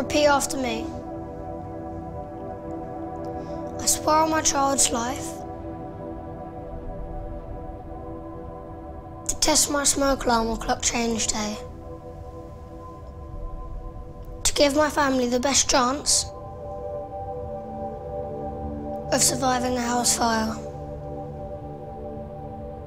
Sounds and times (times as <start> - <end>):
Child speech, kid speaking: 0.0 - 1.0, 3.8 - 5.4, 9.3 - 11.7, 14.4 - 16.4, 19.1 - 20.8
Music: 0.0 - 22.8.